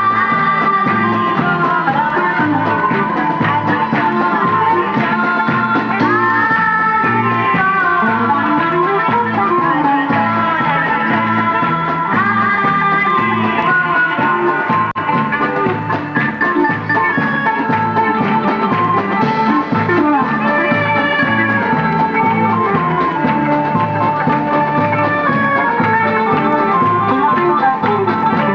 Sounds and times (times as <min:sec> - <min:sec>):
Folk music: 0:00.0 - 0:28.5.